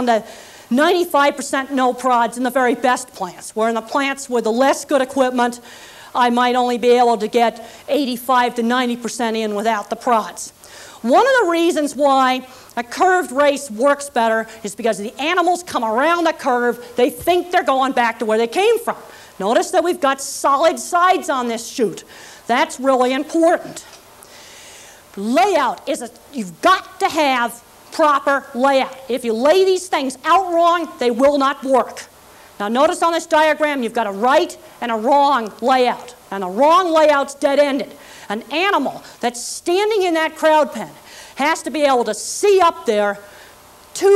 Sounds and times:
Speech: 0:00.0 - 0:05.6, 0:06.2 - 0:23.9, 0:25.2 - 0:43.2, 0:44.0 - 0:44.1.

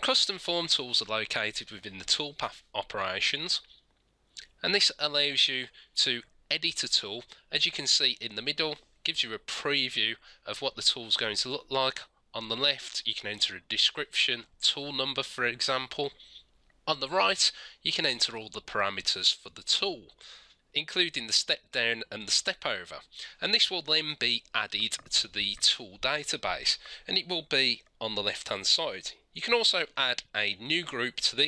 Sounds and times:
Speech: 0:00.0 - 0:03.7, 0:04.4 - 0:16.2, 0:16.9 - 0:20.2, 0:20.8 - 0:31.4.

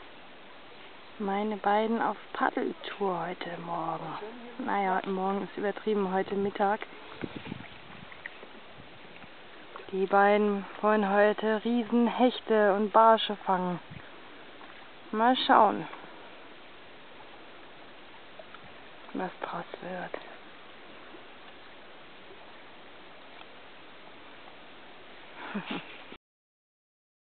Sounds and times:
Rowboat, canoe, kayak: 0:00.0 - 0:26.2
Speech: 0:01.2 - 0:06.8, 0:09.9 - 0:13.8, 0:15.1 - 0:16.0, 0:19.1 - 0:20.2.

